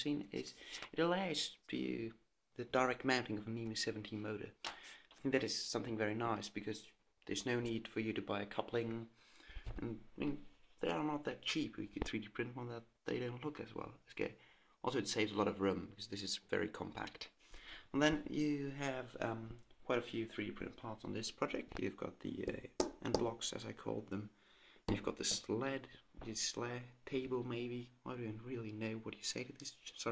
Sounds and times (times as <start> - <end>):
Speech: 0.0 - 4.6, 5.2 - 30.1.